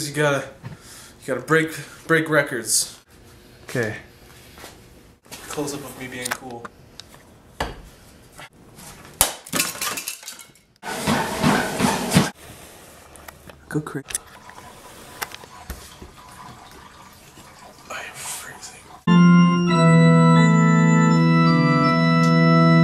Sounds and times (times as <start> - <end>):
Speech: 0.0 - 0.6, 1.2 - 3.0, 3.7 - 4.1, 5.5 - 6.7, 13.7 - 14.1.